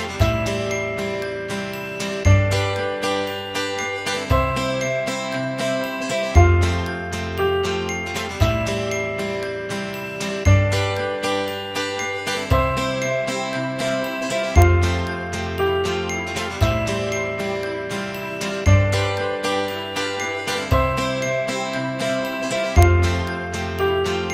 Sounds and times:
Music: 0.0 - 24.3.

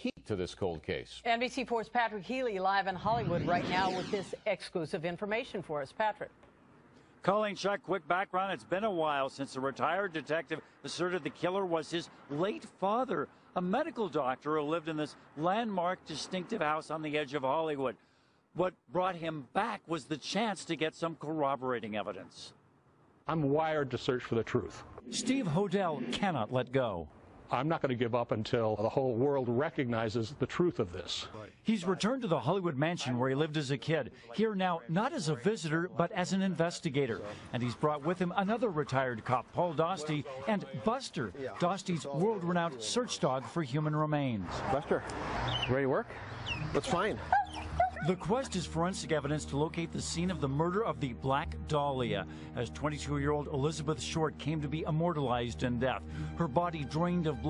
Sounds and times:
Speech: 7.2 - 18.0, 18.6 - 22.6, 23.3 - 45.0, 48.0 - 57.4.

